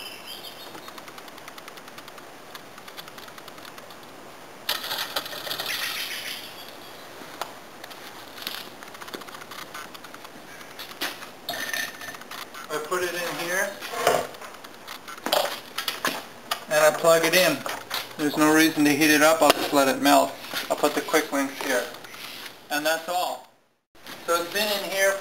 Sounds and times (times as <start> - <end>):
Bicycle: 4.7 - 13.7
Speech: 12.7 - 13.8, 16.7 - 17.6, 18.2 - 22.0, 22.7 - 23.5, 24.3 - 25.2.